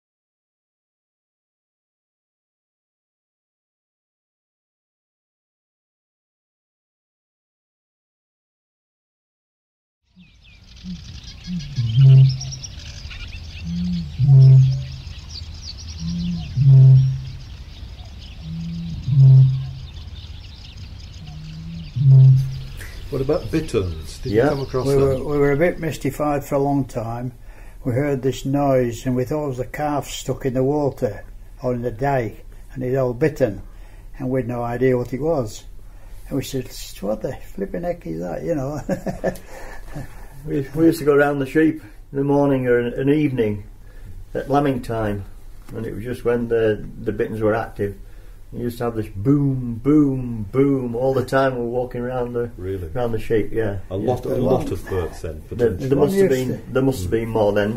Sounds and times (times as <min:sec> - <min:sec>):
Outside, rural or natural: 0:10.1 - 0:28.0, 0:38.8 - 0:46.4.